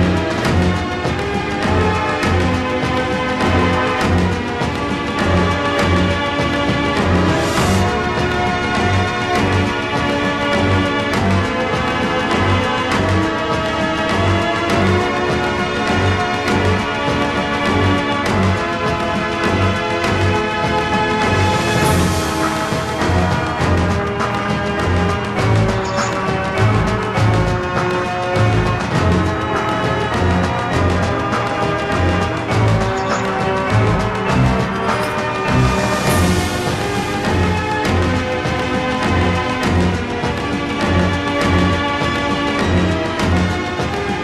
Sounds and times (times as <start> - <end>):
Exciting music: 0.0 - 44.2
Video game music: 0.0 - 44.2.